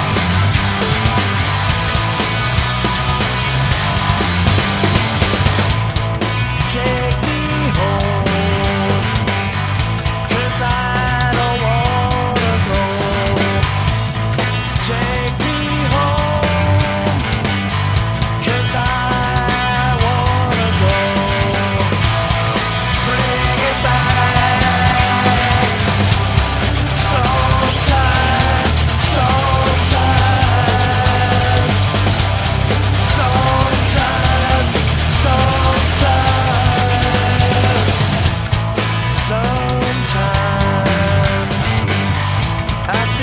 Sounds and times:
Heavy metal: 0:00.0 - 0:43.2.

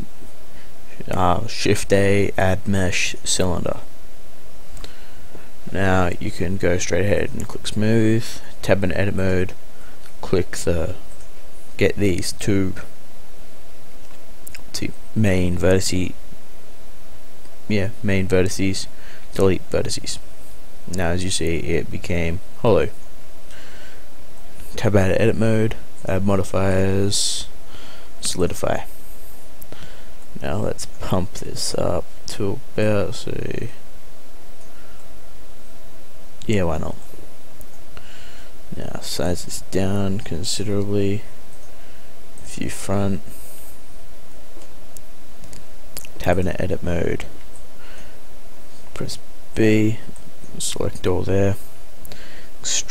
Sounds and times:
Speech: 0:00.9 - 0:03.9, 0:05.7 - 0:09.6, 0:10.2 - 0:11.0, 0:11.8 - 0:12.9, 0:14.5 - 0:16.2, 0:17.7 - 0:20.2, 0:20.9 - 0:23.0, 0:24.7 - 0:27.6, 0:28.2 - 0:28.9, 0:30.4 - 0:33.8, 0:36.4 - 0:37.0, 0:38.7 - 0:41.3, 0:42.4 - 0:43.3, 0:46.0 - 0:47.3, 0:48.9 - 0:51.6, 0:52.6 - 0:52.9.

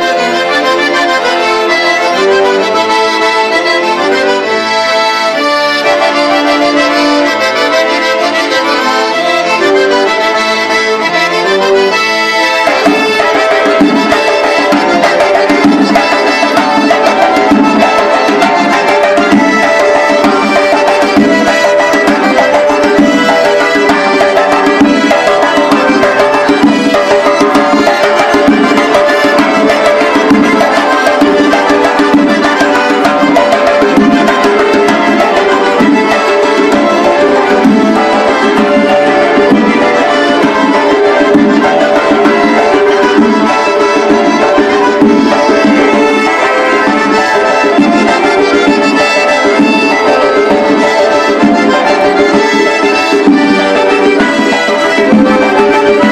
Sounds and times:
Music: 0:00.0 - 0:56.1.

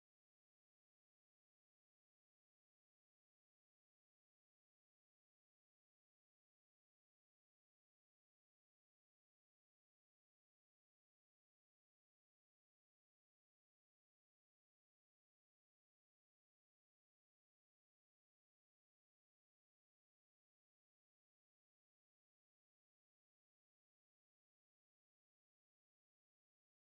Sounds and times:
Music: 0:00.0 - 0:26.9.

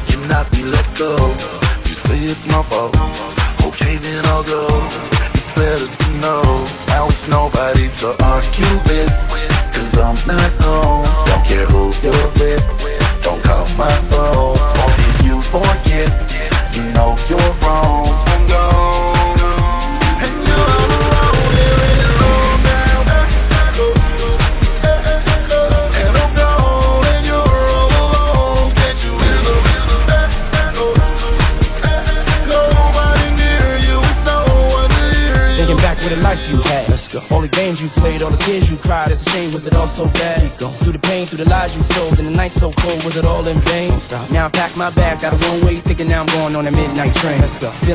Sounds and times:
Music: 0:00.0 - 0:47.9.

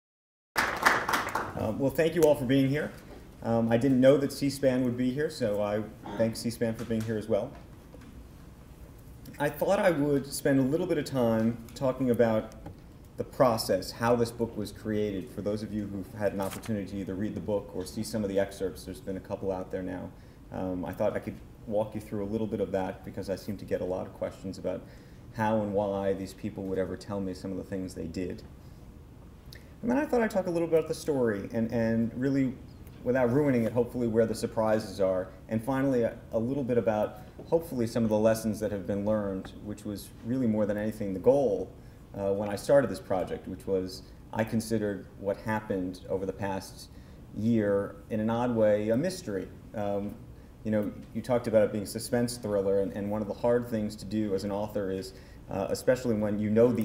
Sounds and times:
Speech: 0:01.6 - 0:07.6, 0:09.3 - 0:12.6, 0:13.2 - 0:28.5, 0:29.8 - 0:56.8.

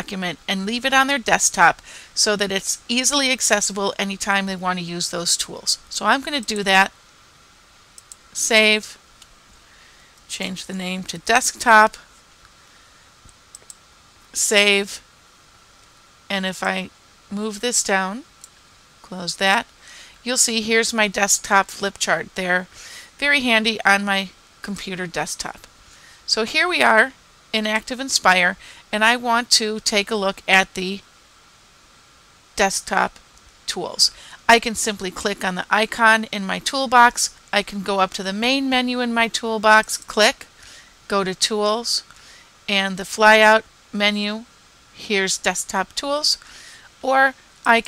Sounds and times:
Speech: 0:00.0 - 0:06.9, 0:08.4 - 0:09.0, 0:10.3 - 0:12.0, 0:14.4 - 0:15.0, 0:16.3 - 0:18.2, 0:19.1 - 0:25.7, 0:26.3 - 0:31.0, 0:32.6 - 0:40.5, 0:41.1 - 0:42.1, 0:42.7 - 0:46.4, 0:47.0 - 0:47.8.

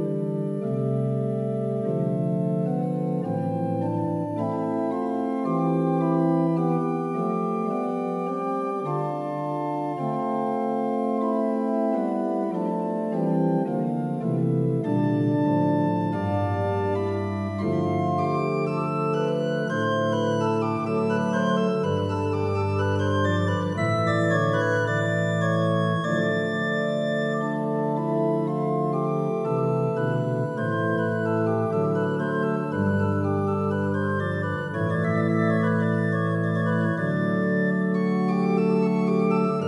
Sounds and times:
Music: 0:00.0 - 0:39.6.

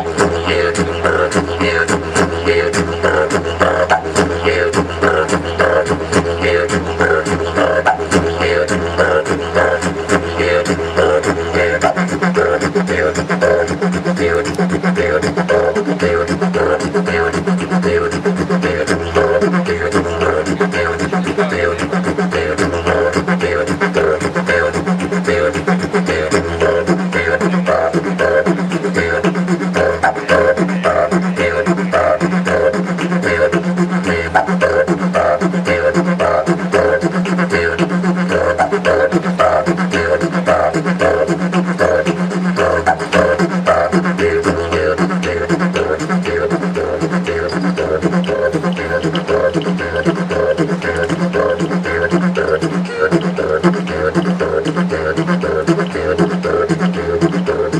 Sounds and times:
Didgeridoo: 0:00.0 - 0:57.7
Speech: 0:20.2 - 0:22.3, 0:27.3 - 0:28.2, 0:30.1 - 0:32.6.

